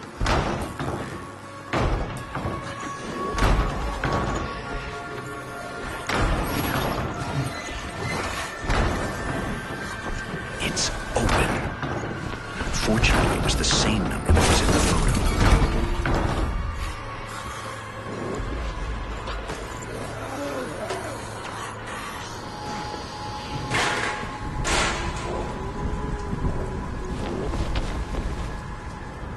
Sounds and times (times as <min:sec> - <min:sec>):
Music: 0:00.0 - 0:29.3.